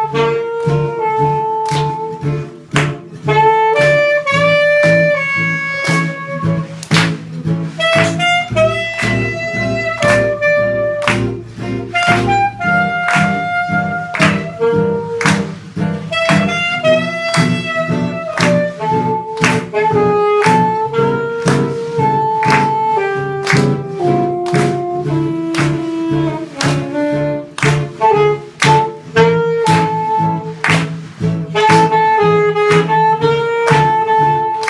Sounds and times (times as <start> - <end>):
Acoustic guitar: 0.0 - 34.7.